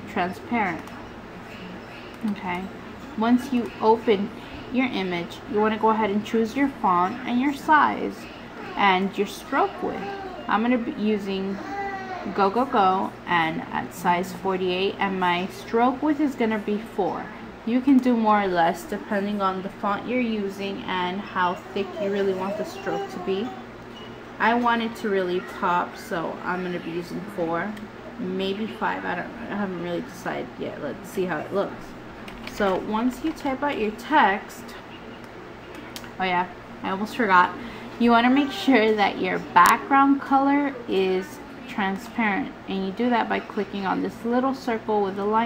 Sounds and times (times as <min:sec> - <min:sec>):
Speech: 0:00.0 - 0:23.6, 0:24.4 - 0:31.9, 0:32.5 - 0:35.2, 0:35.8 - 0:45.4.